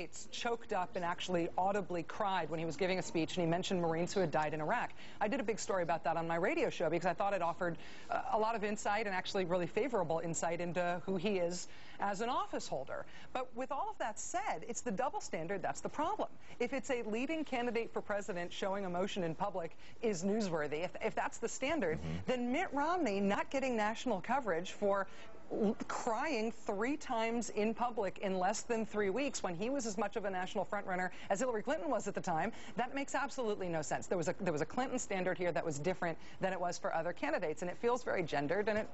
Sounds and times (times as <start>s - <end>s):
Speech: 0.0s - 38.9s.